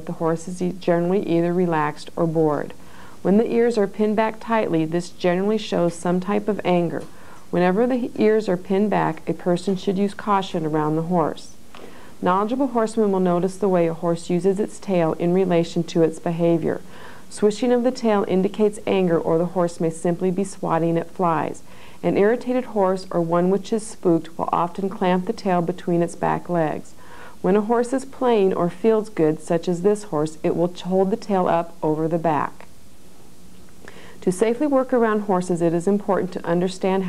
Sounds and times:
Speech: 0.0s - 11.6s, 12.2s - 32.7s, 34.2s - 37.0s.

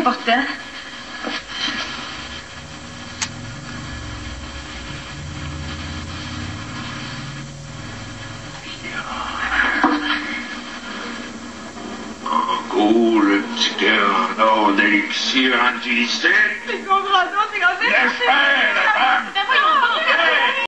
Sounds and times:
Speech: 12.3s - 20.6s.

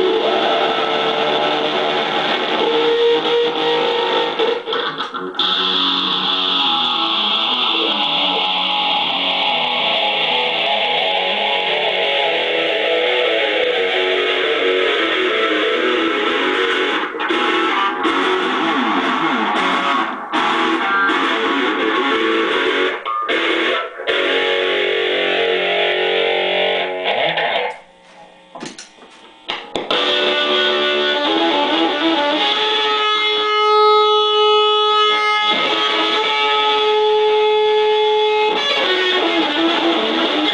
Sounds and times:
Electric guitar: 0.0s - 40.5s.

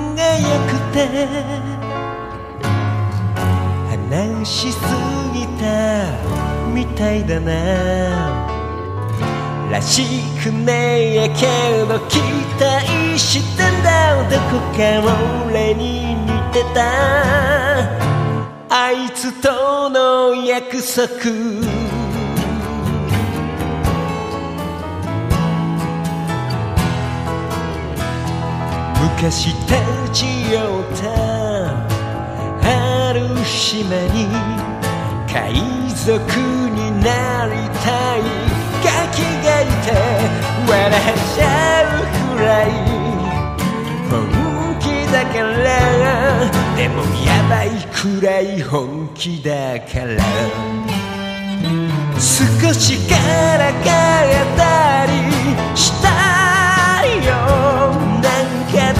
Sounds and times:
Music: 0.0s - 58.9s.

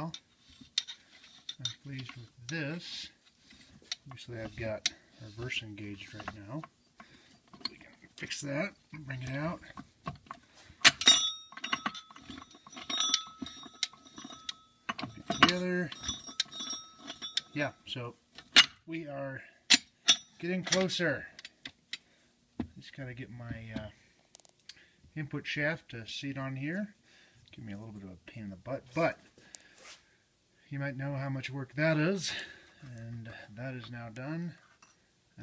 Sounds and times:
Speech: 1.6s - 3.2s, 4.1s - 6.7s, 7.7s - 9.7s, 18.9s - 19.5s, 20.4s - 21.3s, 22.8s - 24.0s, 25.2s - 29.3s, 30.7s - 34.6s.

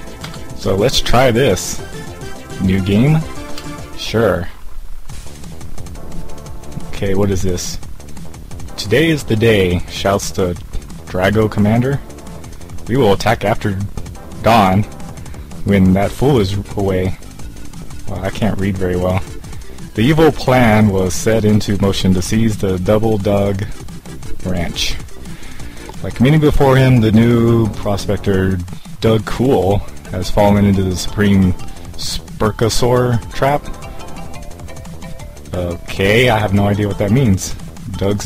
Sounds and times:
Music: 0.0s - 38.2s
Speech: 0.6s - 1.8s, 2.6s - 3.4s, 4.0s - 4.6s, 6.9s - 7.9s, 8.8s - 12.0s, 12.9s - 14.9s, 15.6s - 17.2s, 18.1s - 19.3s, 20.0s - 23.8s, 24.4s - 25.1s, 26.0s - 33.7s, 35.5s - 38.2s.

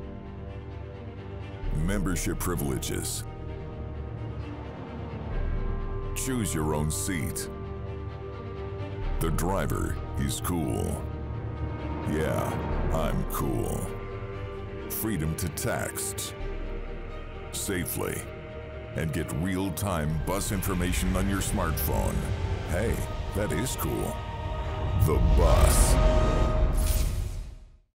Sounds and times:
Music: 0.0s - 27.9s
Speech: 1.7s - 3.2s, 6.2s - 7.5s, 9.2s - 11.0s, 12.1s - 14.0s, 14.9s - 16.3s, 17.5s - 18.3s, 19.0s - 24.2s, 25.0s - 26.0s.

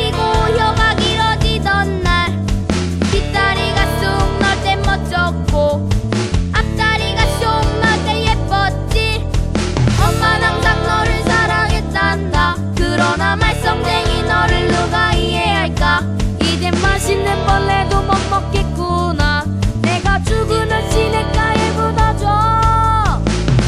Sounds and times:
Music: 0.0s - 23.6s.

